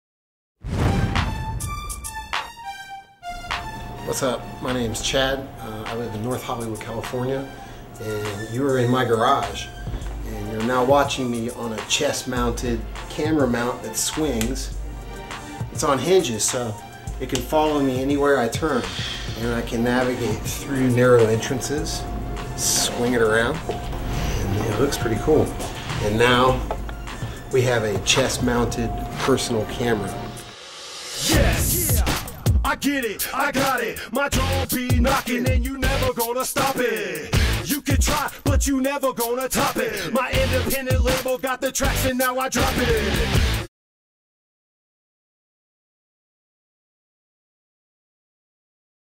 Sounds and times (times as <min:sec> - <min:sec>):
Music: 0:00.6 - 0:43.7
Speech: 0:04.0 - 0:14.7, 0:15.8 - 0:22.0, 0:22.6 - 0:23.6, 0:24.4 - 0:26.7, 0:27.5 - 0:30.2.